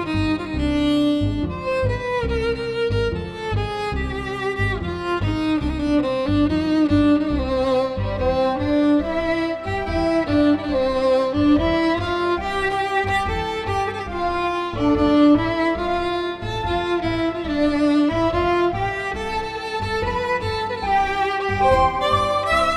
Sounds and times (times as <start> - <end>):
Violin, fiddle: 0.0 - 22.7.